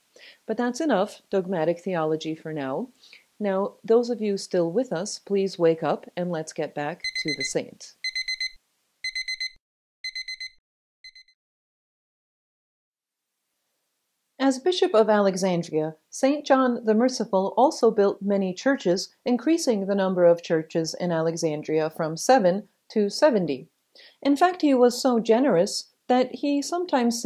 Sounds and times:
Speech: 0.5 - 8.0, 14.4 - 27.2.

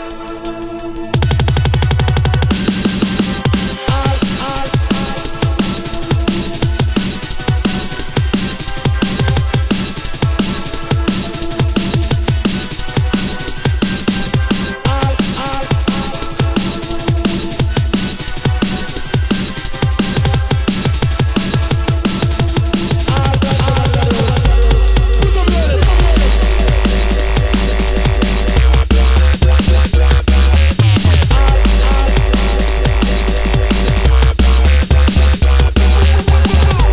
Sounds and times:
Electronic music: 0.0 - 36.9.

